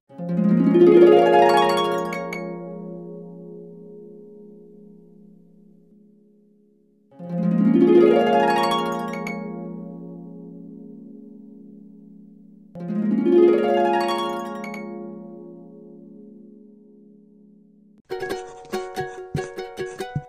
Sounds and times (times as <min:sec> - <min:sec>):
Music: 0:00.0 - 0:20.2.